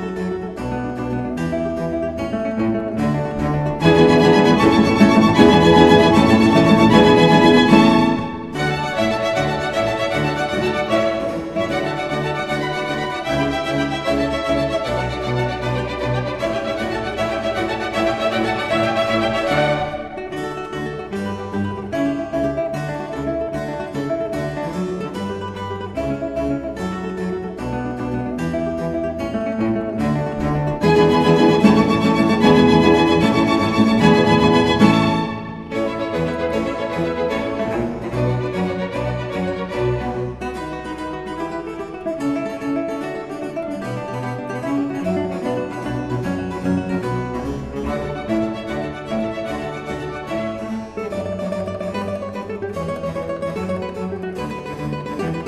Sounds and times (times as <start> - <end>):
Guitar: 0.0 - 55.4
Orchestra: 0.0 - 55.4.